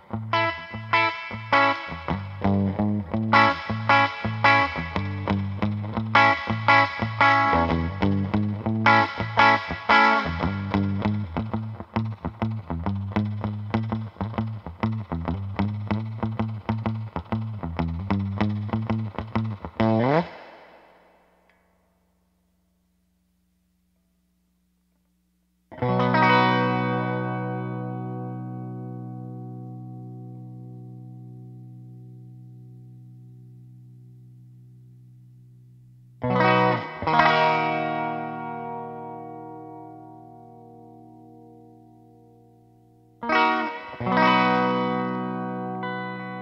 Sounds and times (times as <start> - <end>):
Guitar: 0.0 - 22.5, 24.9 - 46.4.